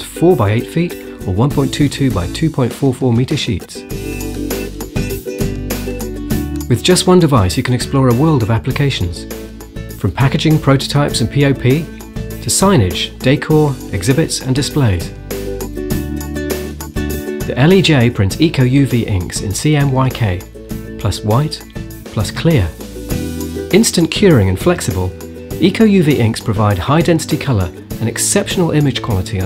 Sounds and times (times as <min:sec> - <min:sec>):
Speech: 0:00.0 - 0:03.9, 0:06.7 - 0:09.3, 0:10.0 - 0:15.1, 0:17.4 - 0:22.8, 0:23.7 - 0:29.4
Music: 0:00.0 - 0:29.4.